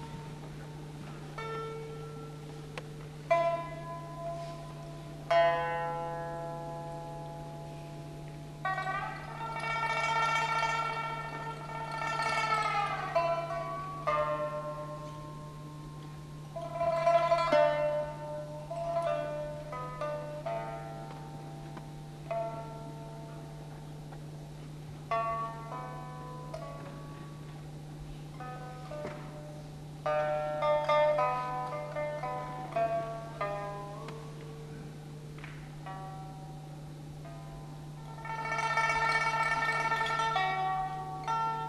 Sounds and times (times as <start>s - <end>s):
Music: 0.0s - 41.6s.